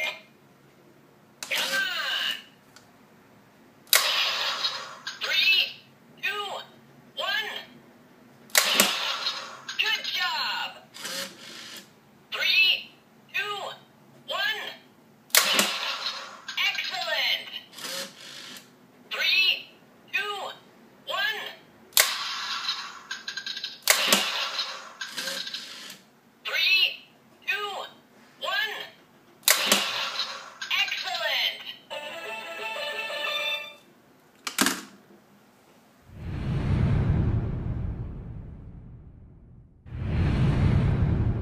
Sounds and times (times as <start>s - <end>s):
Speech: 1.5s - 2.6s, 5.2s - 7.8s, 9.8s - 10.9s, 12.3s - 14.9s, 16.6s - 17.7s, 19.1s - 21.7s, 26.5s - 29.0s, 30.7s - 31.8s.